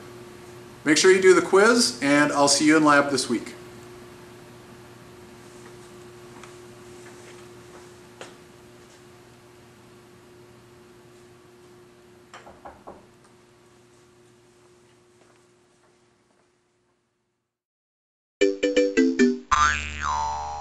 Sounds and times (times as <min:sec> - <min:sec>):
Music: 0:18.4 - 0:19.5.